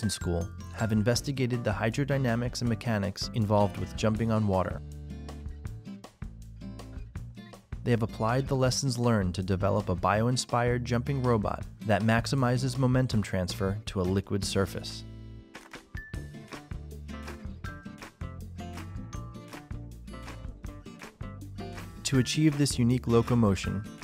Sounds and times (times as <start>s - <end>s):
Speech: 0.0s - 4.8s, 7.8s - 15.1s, 22.0s - 23.9s
Music: 0.0s - 24.0s.